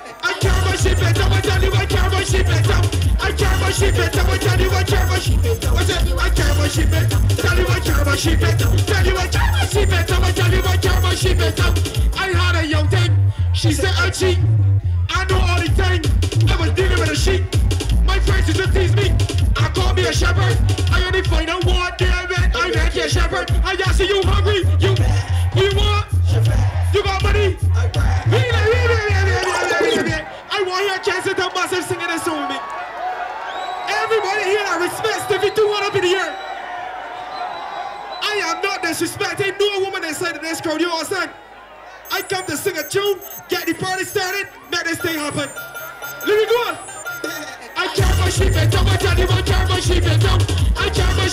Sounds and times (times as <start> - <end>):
Music: 0.4 - 29.4, 45.6 - 51.3
Speech: 11.6 - 14.5, 15.1 - 17.5, 18.1 - 26.1, 27.0 - 27.6, 28.3 - 32.6, 33.9 - 36.4, 38.2 - 41.3, 42.1 - 45.6.